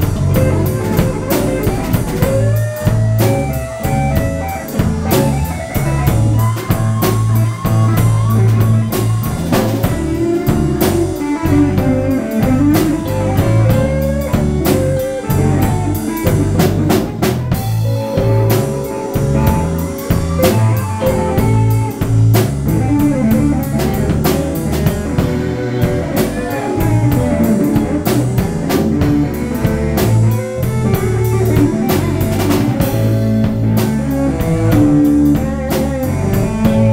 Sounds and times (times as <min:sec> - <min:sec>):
Electric guitar: 0:00.0 - 0:36.9
Strum: 0:00.0 - 0:36.9.